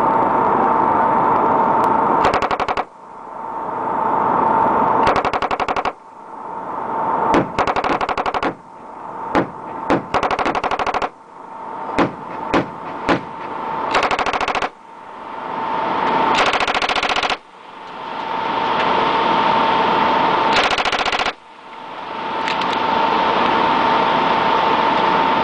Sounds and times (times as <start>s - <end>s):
Machine gun: 2.2s - 2.9s, 5.1s - 6.0s, 7.4s - 8.6s, 9.9s - 11.2s, 13.9s - 14.8s, 16.4s - 17.4s, 20.5s - 21.4s.